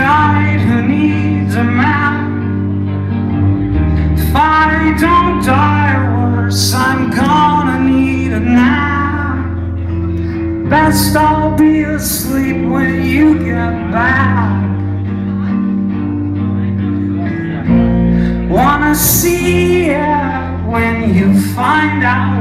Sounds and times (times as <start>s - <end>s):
Music: 0.0s - 22.4s.